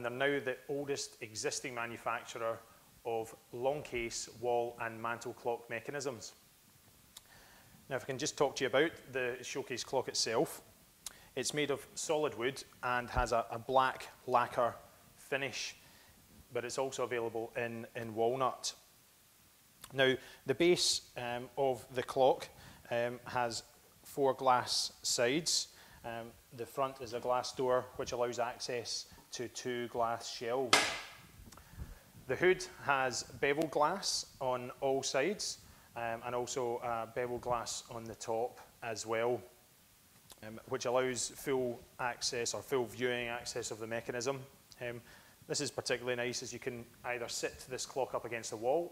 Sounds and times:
Speech: 0.0s - 6.4s, 7.9s - 10.7s, 11.4s - 15.8s, 16.5s - 18.8s, 19.9s - 30.8s, 32.3s - 39.6s, 40.4s - 48.9s.

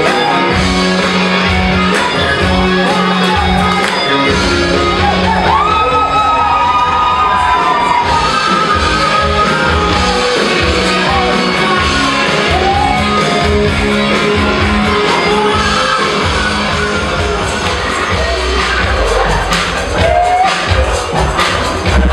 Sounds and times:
Dance music: 0.0s - 22.1s.

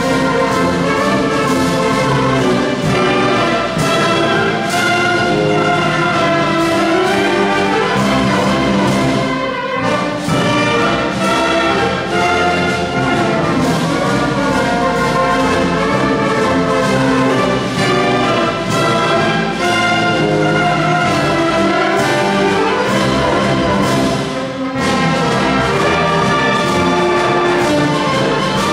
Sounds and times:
Music: 0.0s - 28.7s.

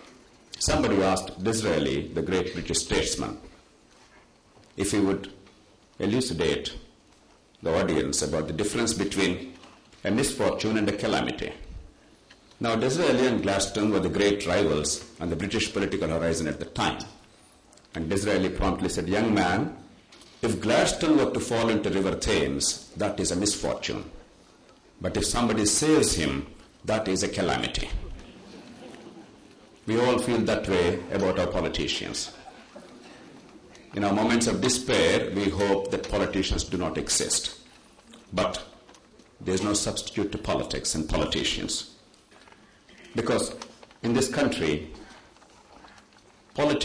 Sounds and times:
Narration, monologue: 0.0s - 46.8s.

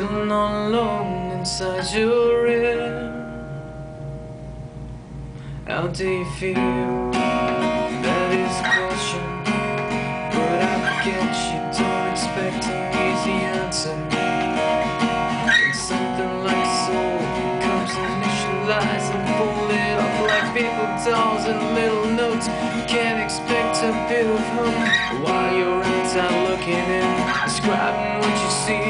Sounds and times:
Music: 0.0s - 28.9s.

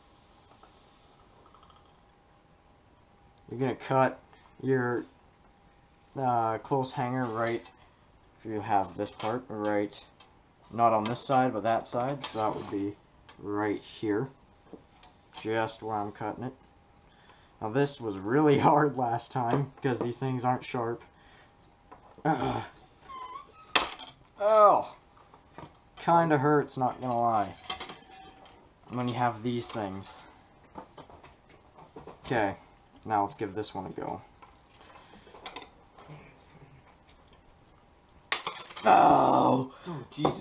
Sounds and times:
Inside, small room: 0.0s - 40.4s
Speech: 3.5s - 5.1s, 6.2s - 7.7s, 8.4s - 10.1s, 10.7s - 14.4s, 15.4s - 16.6s, 17.6s - 21.1s, 24.4s - 25.0s, 26.0s - 27.6s, 28.9s - 30.3s, 32.2s - 34.3s, 38.8s - 40.4s.

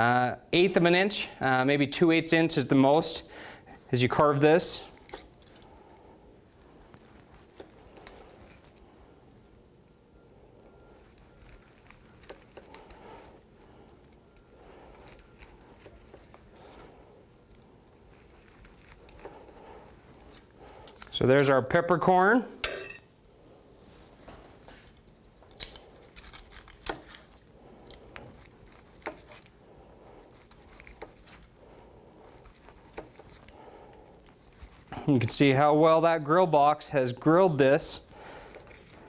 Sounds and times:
Speech: 0.0s - 3.3s, 3.9s - 4.9s, 21.1s - 22.6s, 35.0s - 38.0s
Inside, small room: 0.0s - 39.0s.

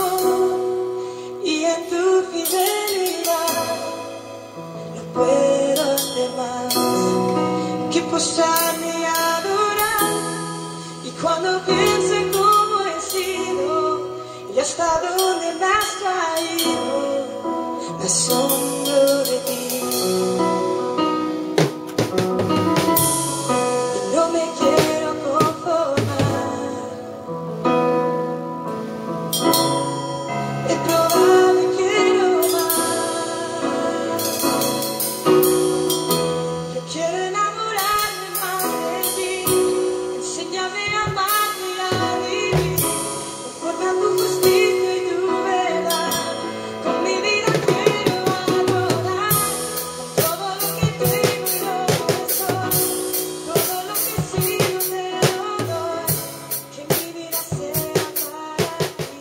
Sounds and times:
Drum kit: 0.0s - 59.2s
Cymbal: 8.6s - 14.6s, 28.3s - 47.6s
Drum: 21.6s - 26.7s, 40.9s - 44.7s, 47.4s - 59.2s.

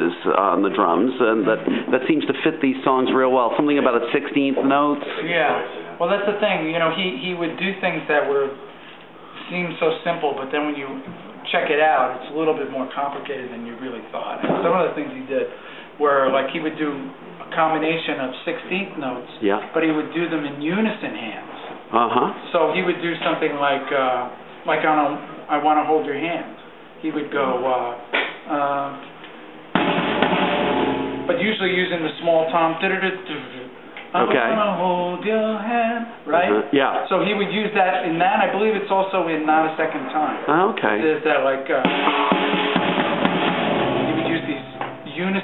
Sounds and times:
Speech: 0.0s - 8.6s, 9.4s - 29.1s, 31.3s - 35.3s, 35.9s - 41.9s, 44.1s - 45.4s
Inside, small room: 0.0s - 45.4s.

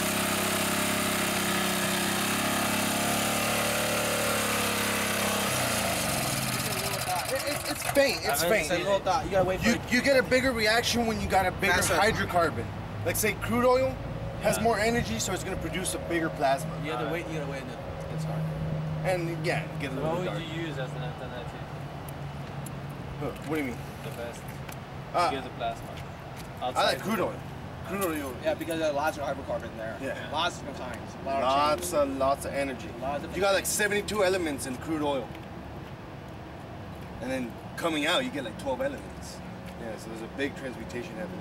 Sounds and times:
Medium engine (mid frequency): 0.0s - 25.4s
Vehicle: 0.0s - 41.4s.

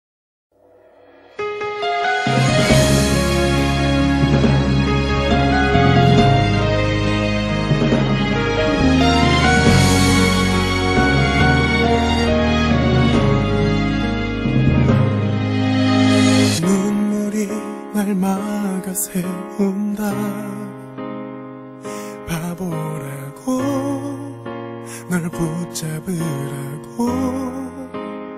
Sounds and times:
Theme music: 0.6s - 18.6s.

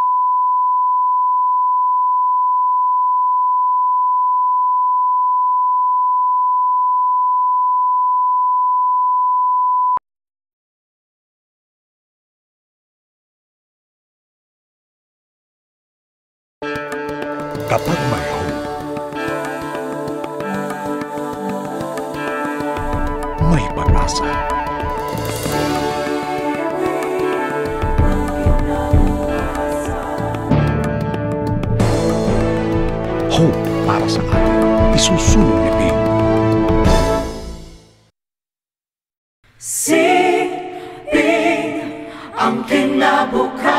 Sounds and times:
Music: 16.6s - 38.1s, 39.9s - 43.7s
Speech: 17.7s - 18.6s, 23.4s - 24.3s, 33.3s - 36.0s.

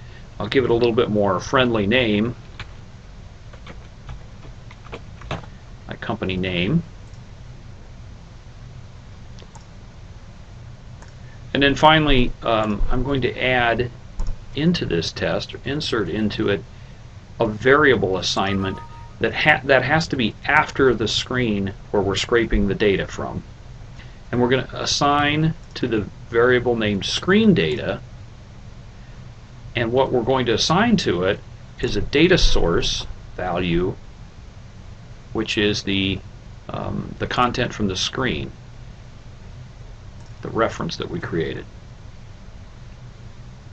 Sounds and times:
Speech: 0.4s - 2.4s, 5.9s - 6.9s, 11.5s - 13.9s, 14.6s - 16.6s, 17.4s - 23.5s, 24.3s - 28.0s, 29.8s - 34.0s, 35.4s - 38.6s, 40.4s - 41.7s.

